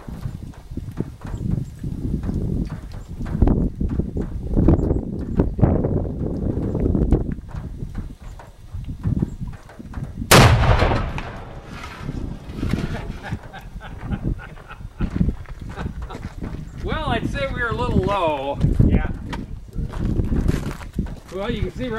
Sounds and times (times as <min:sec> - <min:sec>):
Outside, rural or natural: 0:00.0 - 0:21.9.